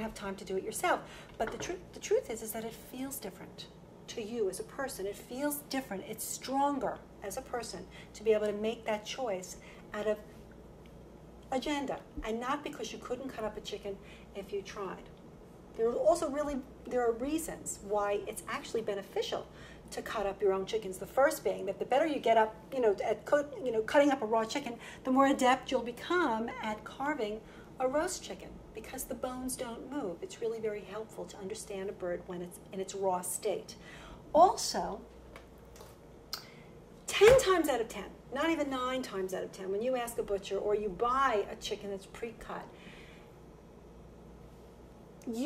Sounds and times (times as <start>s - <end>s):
Speech: 0.0s - 10.3s, 11.5s - 15.1s, 15.8s - 33.8s, 34.4s - 35.1s, 37.1s - 42.7s, 45.2s - 45.4s.